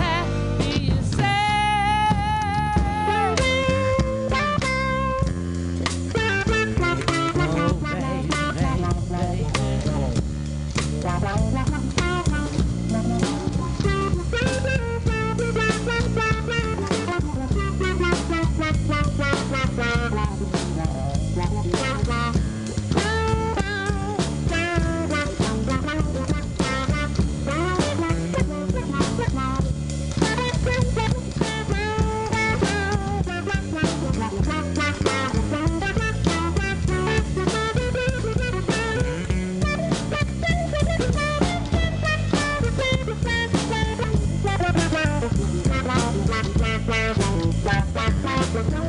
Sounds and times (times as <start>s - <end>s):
Strum: 0.0s - 48.8s.